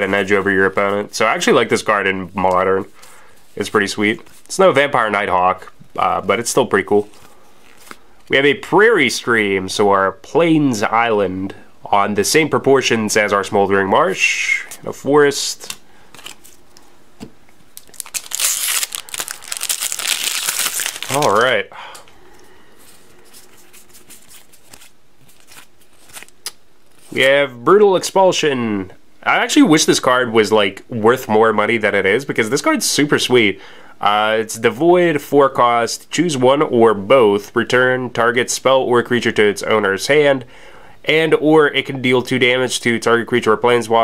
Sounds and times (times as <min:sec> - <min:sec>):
Speech: 0:00.0 - 0:02.9, 0:03.6 - 0:07.1, 0:08.3 - 0:15.8, 0:21.1 - 0:21.8, 0:27.1 - 0:44.0.